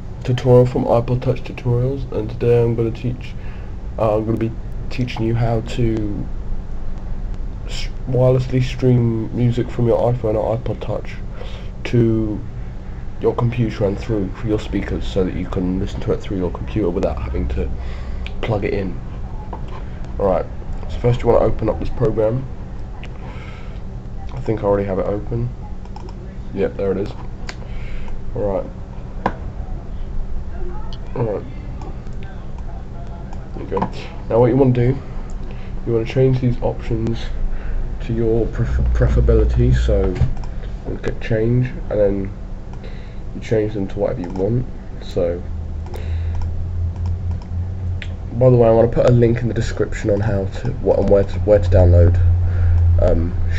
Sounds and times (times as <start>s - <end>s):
Speech: 0.2s - 3.4s, 4.0s - 6.3s, 7.7s - 11.2s, 11.8s - 12.5s, 13.2s - 19.5s, 20.2s - 23.2s, 24.2s - 27.2s, 28.4s - 28.8s, 30.5s - 35.0s, 35.8s - 37.4s, 38.0s - 40.3s, 40.9s - 42.4s, 43.4s - 45.5s, 48.3s - 52.3s, 53.0s - 53.5s.